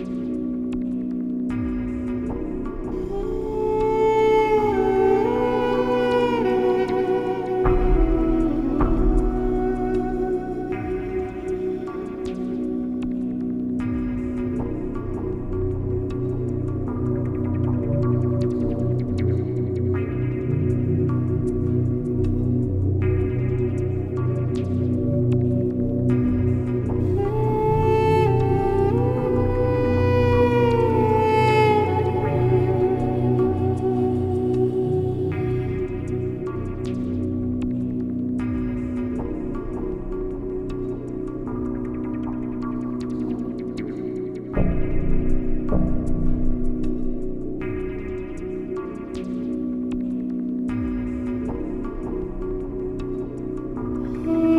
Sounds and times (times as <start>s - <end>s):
Ambient music: 0.0s - 54.5s
New-age music: 0.0s - 54.5s.